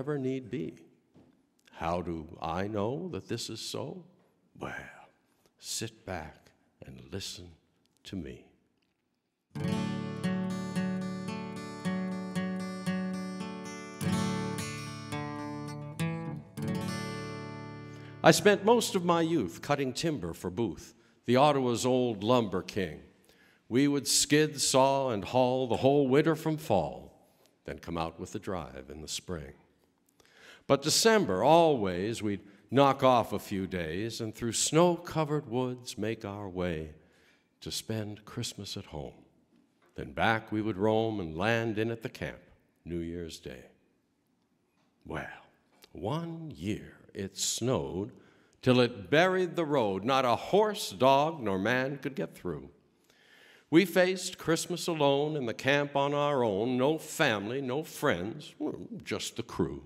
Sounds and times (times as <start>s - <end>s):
Speech: 0.0s - 0.9s, 1.7s - 8.6s, 18.2s - 23.1s, 23.7s - 29.6s, 30.7s - 37.0s, 37.6s - 39.2s, 40.0s - 43.8s, 45.0s - 52.7s, 53.7s - 59.8s
Music: 9.6s - 18.4s.